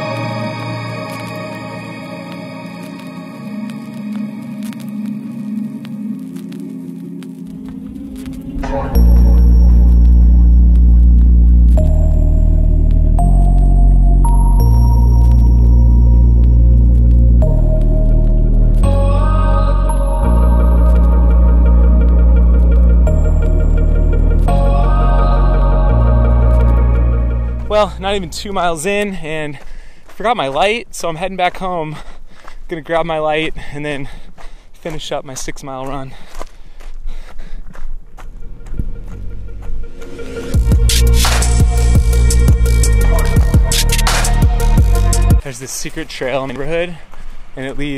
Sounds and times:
Ambient music: 0.0 - 29.0, 38.1 - 45.4.

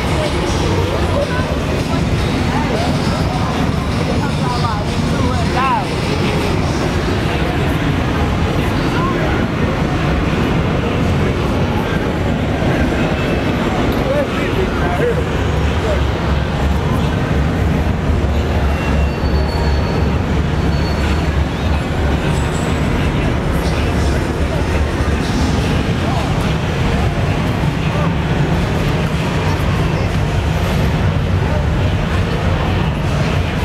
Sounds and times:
Speech: 0.0 - 33.6.

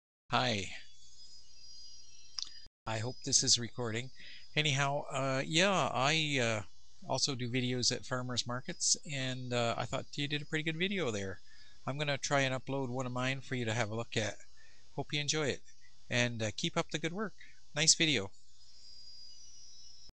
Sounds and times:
Speech: 0.3 - 0.8, 2.9 - 14.4, 15.0 - 18.3.

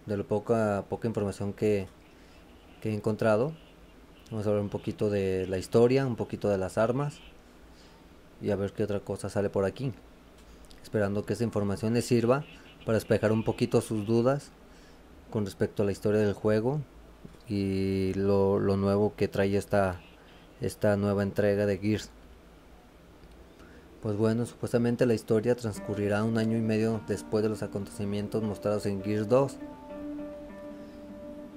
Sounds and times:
Speech: 0.0 - 1.9, 2.8 - 3.6, 4.3 - 7.3, 8.4 - 10.0, 10.8 - 14.5, 15.3 - 16.9, 17.5 - 22.2, 24.0 - 29.6.

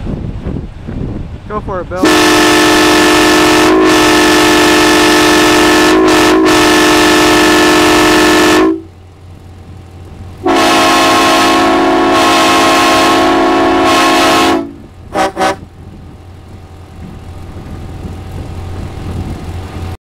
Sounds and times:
Car: 12.9 - 20.0.

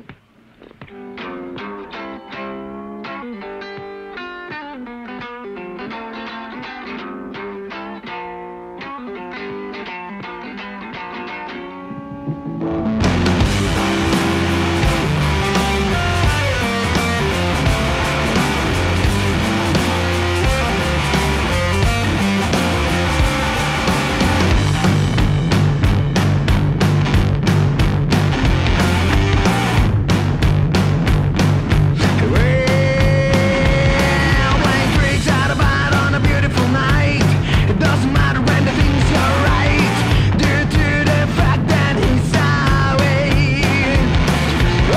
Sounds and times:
Rock and roll: 0.0 - 44.9
Punk rock: 0.9 - 44.9
Soundtrack music: 12.2 - 31.4.

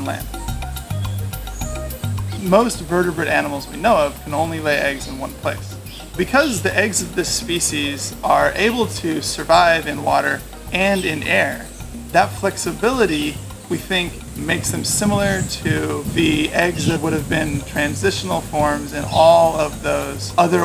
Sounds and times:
Speech: 0.0 - 0.3, 2.4 - 20.6
Music: 0.0 - 20.6.

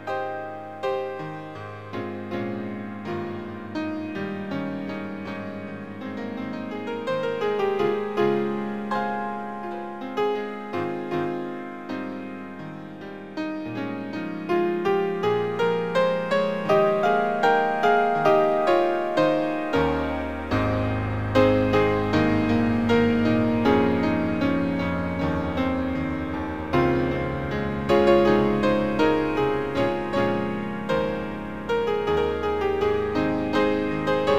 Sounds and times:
Keyboard (musical): 0.0 - 34.3.

